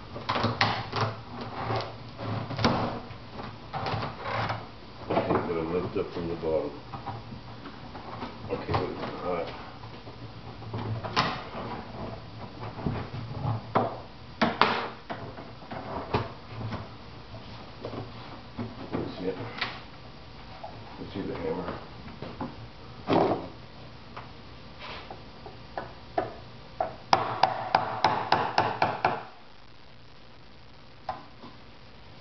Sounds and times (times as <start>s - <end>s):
Speech: 5.1s - 6.8s, 8.5s - 9.6s, 19.0s - 19.6s, 21.0s - 21.9s.